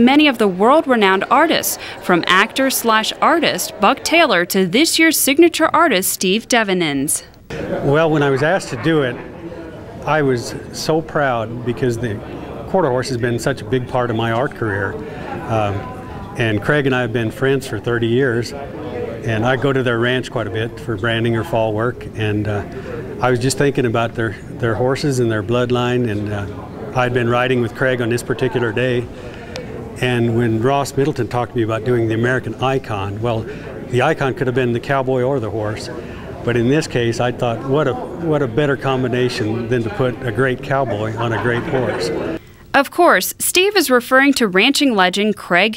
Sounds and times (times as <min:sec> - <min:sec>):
Speech: 0:00.0 - 0:09.3, 0:10.0 - 0:29.1, 0:30.0 - 0:42.2.